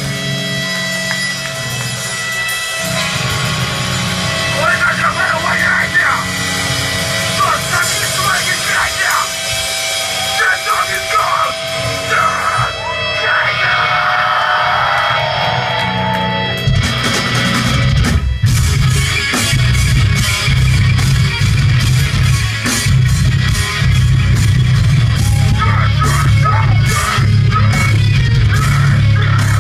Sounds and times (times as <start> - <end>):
Speech: 4.6 - 6.3, 7.4 - 9.3, 10.4 - 12.6.